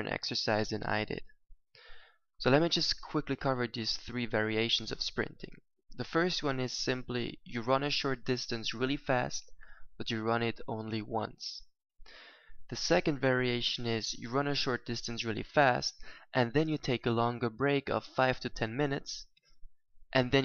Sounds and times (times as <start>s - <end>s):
Speech: 0.0s - 1.4s, 2.4s - 11.7s, 12.7s - 19.3s, 20.1s - 20.4s.